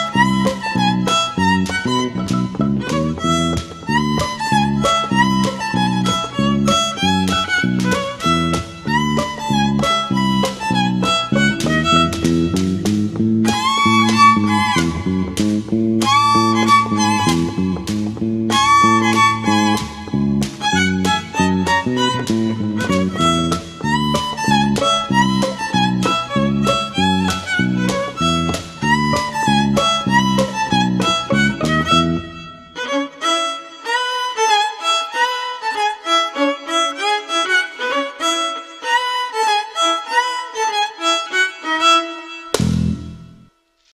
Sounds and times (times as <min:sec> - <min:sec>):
Violin, fiddle: 0:00.0 - 0:43.1.